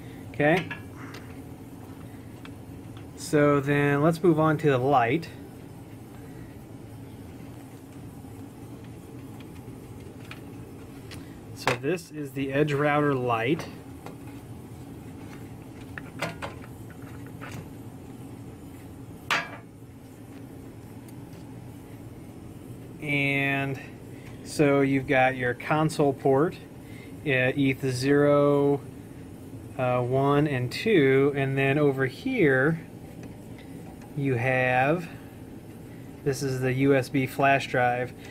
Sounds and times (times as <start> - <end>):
Inside, small room: 0.0 - 38.3
Speech: 0.4 - 0.7, 3.2 - 5.4, 11.6 - 13.8, 23.0 - 28.9, 29.8 - 32.9, 34.2 - 35.2, 36.2 - 38.2.